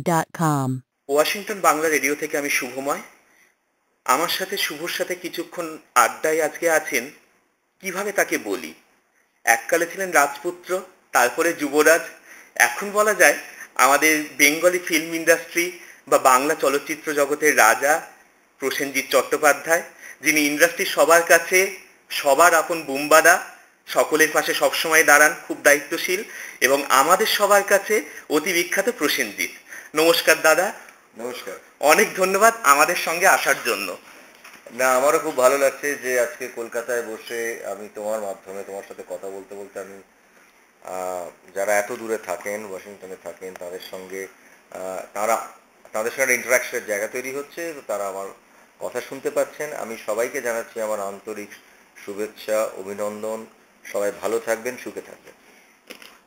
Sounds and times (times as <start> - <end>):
Speech: 0.0 - 3.1, 4.1 - 7.2, 7.8 - 8.8, 9.5 - 34.0, 34.7 - 40.1, 40.8 - 55.4.